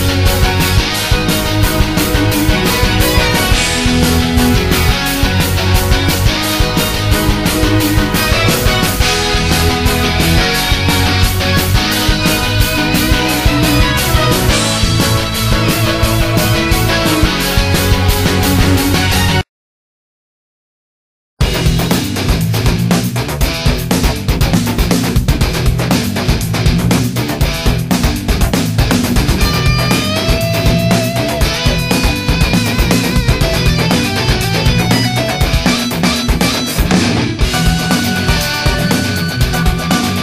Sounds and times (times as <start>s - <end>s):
Exciting music: 0.0s - 19.4s, 21.4s - 40.2s.